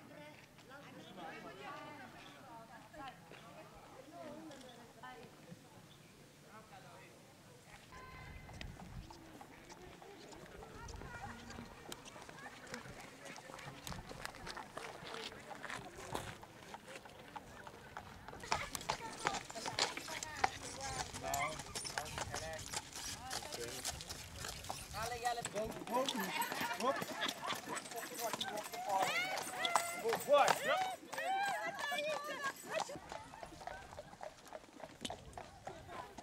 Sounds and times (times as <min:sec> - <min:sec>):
Speech: 0:09.2 - 0:23.9.